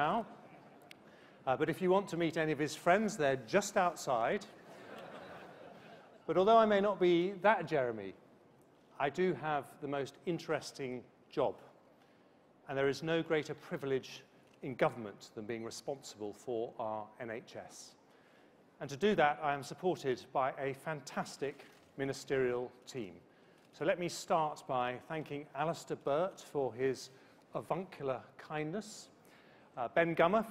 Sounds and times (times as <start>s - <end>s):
Male speech, man speaking: 0.0s - 0.3s, 1.5s - 4.6s, 6.3s - 8.2s, 9.0s - 11.7s, 12.7s - 18.0s, 18.8s - 23.2s, 23.8s - 29.2s, 29.8s - 30.5s.